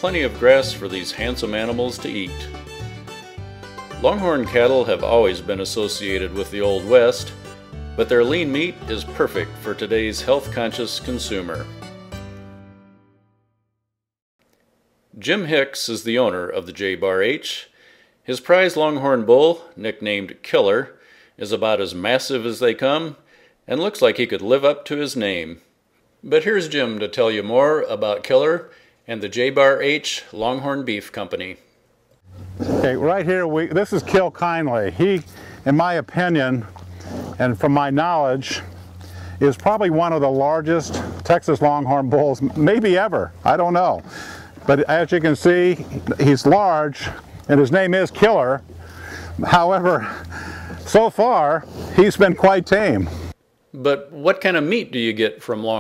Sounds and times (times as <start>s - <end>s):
Speech: 0.0s - 2.6s, 4.0s - 7.4s, 8.0s - 11.7s, 15.2s - 31.6s, 32.7s - 36.7s, 37.4s - 38.7s, 39.4s - 48.6s, 49.4s - 50.2s, 50.9s - 53.1s, 53.8s - 55.8s.